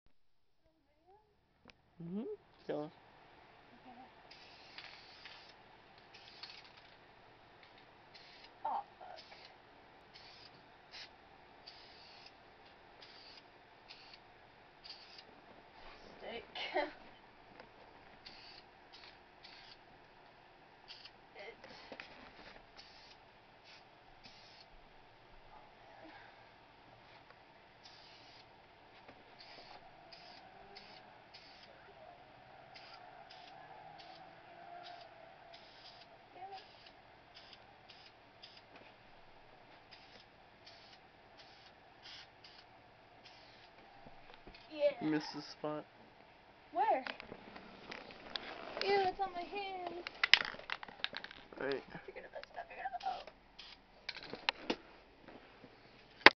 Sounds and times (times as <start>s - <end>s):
Spray: 4.3s - 6.7s, 8.1s - 8.6s, 9.2s - 12.4s, 13.0s - 14.2s, 14.8s - 15.2s, 18.2s - 19.8s, 20.9s - 22.0s, 22.8s - 24.7s, 27.8s - 28.5s, 29.4s - 31.7s, 32.7s - 34.2s, 35.6s - 38.7s, 39.9s - 43.7s, 53.0s - 53.8s.